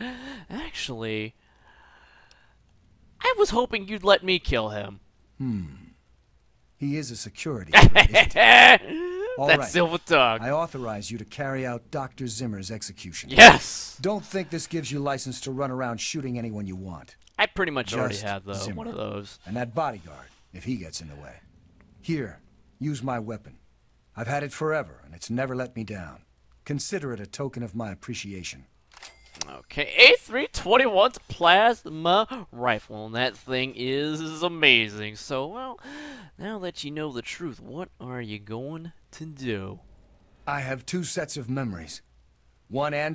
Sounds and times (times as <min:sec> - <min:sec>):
Speech: 0:03.2 - 0:05.8, 0:06.8 - 0:07.8, 0:09.2 - 0:21.4, 0:22.1 - 0:23.6, 0:24.2 - 0:28.7, 0:29.4 - 0:35.8, 0:36.4 - 0:39.8, 0:40.5 - 0:42.0, 0:42.7 - 0:43.1.